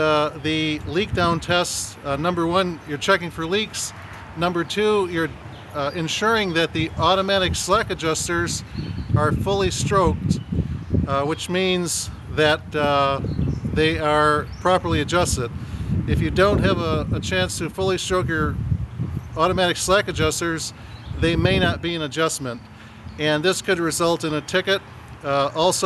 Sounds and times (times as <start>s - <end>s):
Speech: 0.0s - 8.6s, 9.2s - 10.4s, 11.1s - 13.2s, 13.8s - 15.5s, 16.1s - 18.6s, 19.4s - 22.6s, 23.2s - 25.8s.